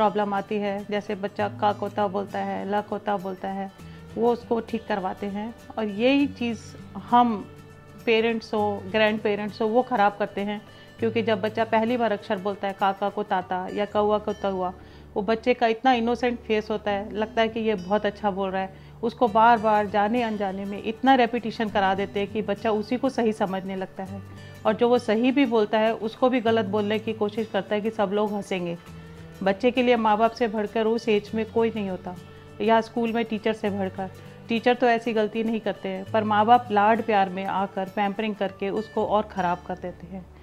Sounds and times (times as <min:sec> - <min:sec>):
Female speech, woman speaking: 0:00.0 - 0:28.8, 0:29.4 - 0:40.3
Music: 0:00.0 - 0:40.4
Narration, monologue: 0:00.0 - 0:40.4.